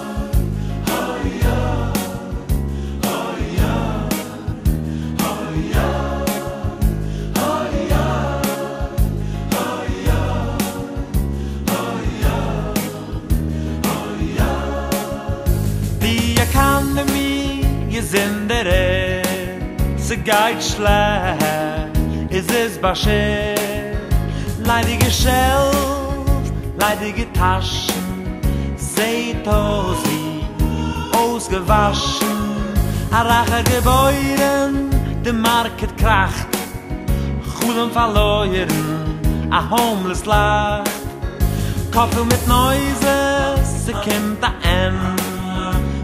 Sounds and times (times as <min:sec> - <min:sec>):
Exciting music: 0:00.0 - 0:18.5, 0:29.0 - 0:35.8, 0:37.6 - 0:44.4
Tender music: 0:00.0 - 0:46.0.